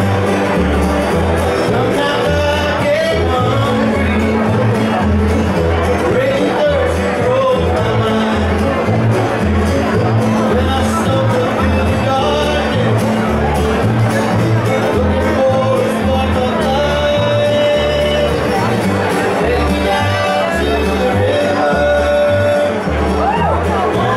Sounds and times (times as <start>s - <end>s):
Crowd: 0.0s - 24.1s
Music: 0.0s - 24.1s.